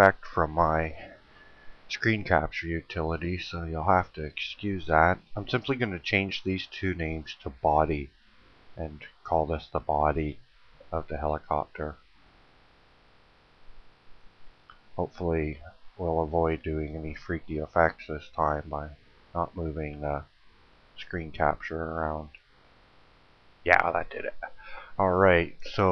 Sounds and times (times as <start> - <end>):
Speech: 0.0 - 1.2, 1.9 - 8.1, 8.8 - 12.0, 15.0 - 20.3, 21.0 - 22.4, 23.7 - 25.9.